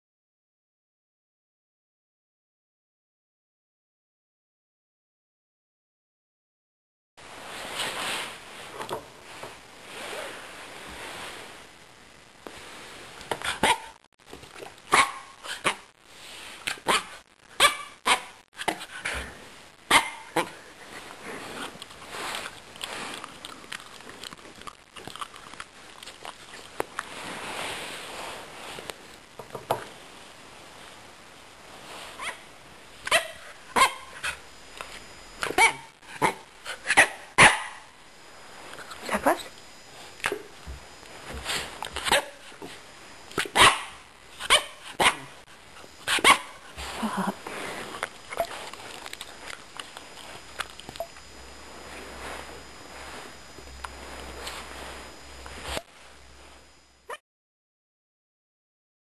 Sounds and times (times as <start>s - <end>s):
Bark: 13.5s - 14.0s, 14.9s - 15.9s, 16.8s - 18.4s, 19.9s - 20.6s, 33.0s - 34.4s, 35.4s - 37.9s, 42.0s - 42.5s, 43.4s - 45.3s, 46.1s - 46.6s.